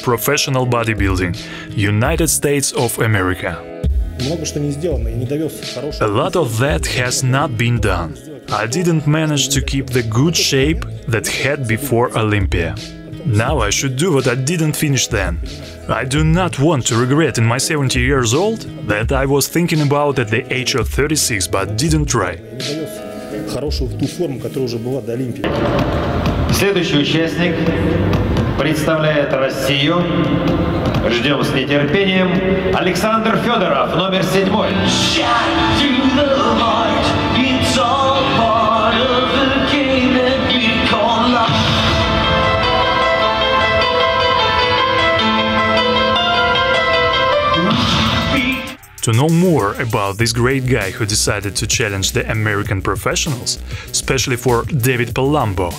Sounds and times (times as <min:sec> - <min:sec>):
Speech: 0:00.0 - 0:25.5, 0:26.5 - 0:28.0, 0:28.6 - 0:30.3, 0:31.0 - 0:34.9, 0:47.6 - 0:55.7
Music: 0:00.0 - 0:55.7.